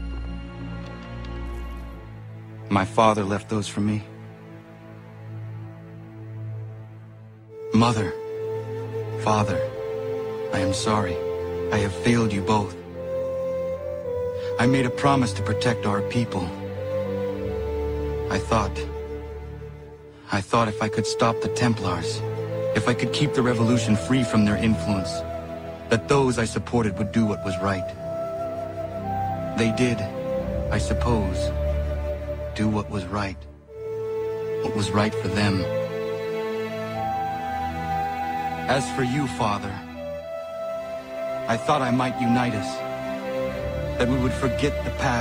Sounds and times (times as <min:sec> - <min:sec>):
Music: 0:00.0 - 0:45.2
Narration, monologue: 0:00.0 - 0:45.2
Male speech, man speaking: 0:02.7 - 0:04.1, 0:07.7 - 0:08.2, 0:09.2 - 0:09.7, 0:10.5 - 0:12.8, 0:14.4 - 0:16.6, 0:18.3 - 0:18.9, 0:20.3 - 0:25.2, 0:25.9 - 0:28.0, 0:29.5 - 0:31.6, 0:32.5 - 0:33.5, 0:34.6 - 0:35.8, 0:38.6 - 0:39.9, 0:41.4 - 0:42.8, 0:43.9 - 0:45.2.